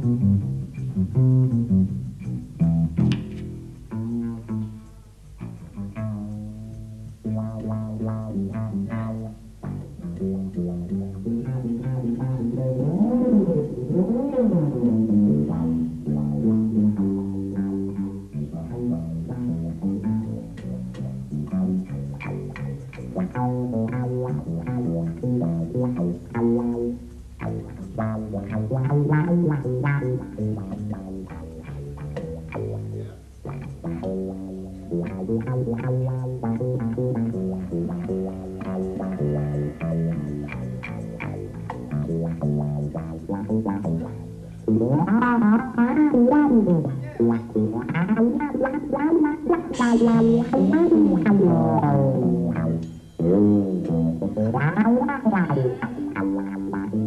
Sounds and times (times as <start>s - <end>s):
Double bass: 0.0s - 57.0s.